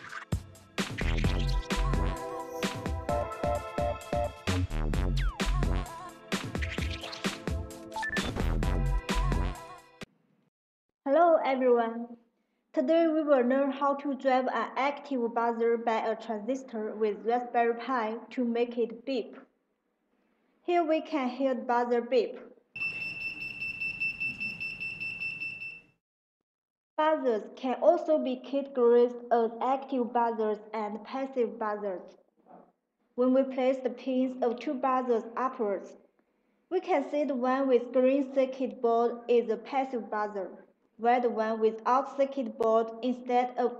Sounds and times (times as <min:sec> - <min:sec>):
Alarm: 0:03.1 - 0:04.5, 0:22.8 - 0:26.0
Speech: 0:11.1 - 0:12.2, 0:12.8 - 0:19.5, 0:20.7 - 0:22.5, 0:27.0 - 0:36.0, 0:36.7 - 0:43.7.